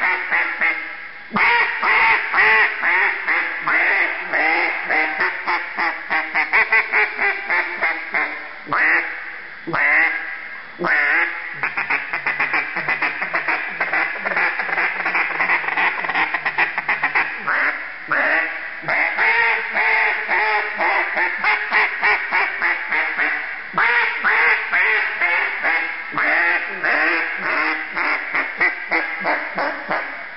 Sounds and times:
Quack: 0.0s - 30.3s.

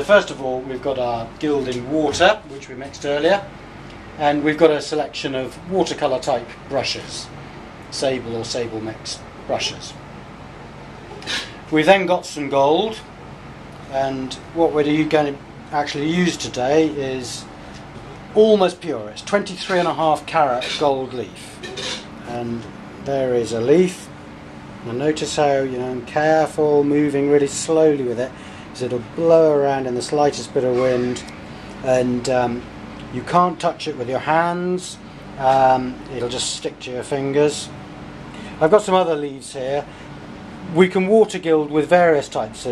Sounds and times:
Speech: 0.0s - 3.5s, 4.2s - 7.3s, 7.9s - 10.0s, 11.3s - 13.1s, 13.8s - 17.5s, 18.3s - 21.6s, 22.2s - 24.1s, 24.8s - 37.7s, 38.6s - 39.9s, 40.6s - 42.7s.

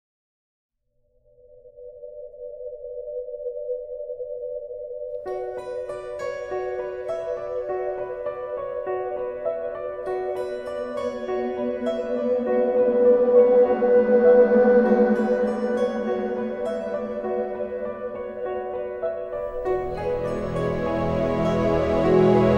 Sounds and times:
Soundtrack music: 5.3s - 22.5s.

